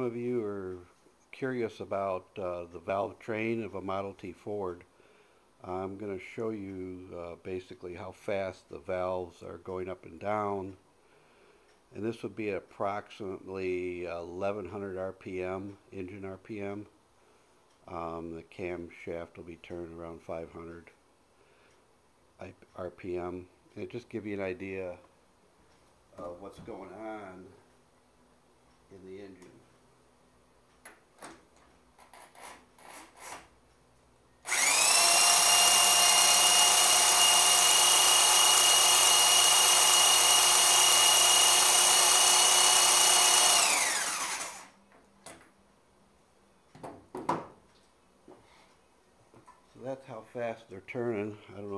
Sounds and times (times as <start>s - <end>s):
Speech: 0.0s - 4.9s, 5.6s - 10.8s, 11.9s - 16.9s, 17.9s - 21.0s, 22.4s - 25.1s, 26.1s - 27.6s, 28.9s - 29.7s, 49.7s - 51.7s
Drill: 34.5s - 44.8s.